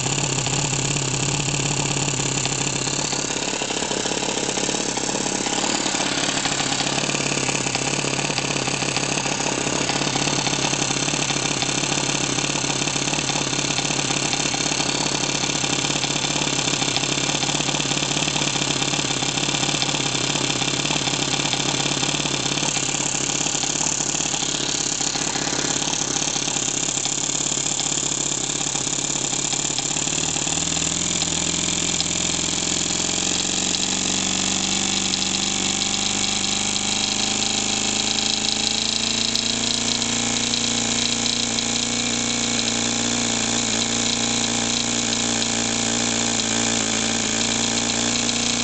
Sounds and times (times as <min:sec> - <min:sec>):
Idling: 0:00.0 - 0:48.6.